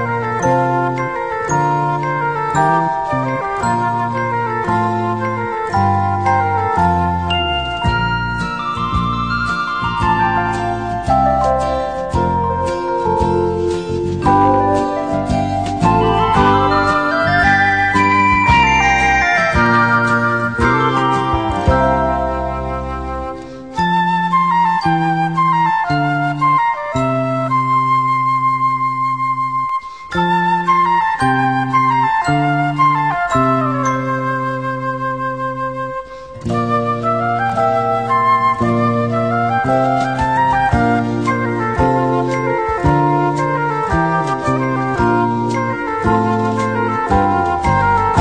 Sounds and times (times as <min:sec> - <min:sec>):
Music: 0:00.0 - 0:48.2.